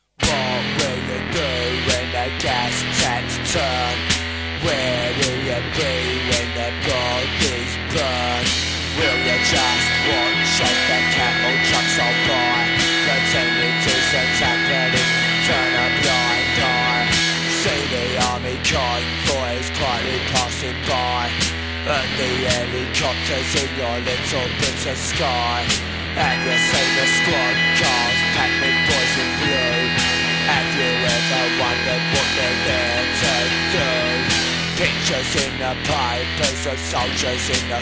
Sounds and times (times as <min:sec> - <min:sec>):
Punk rock: 0:00.2 - 0:37.8.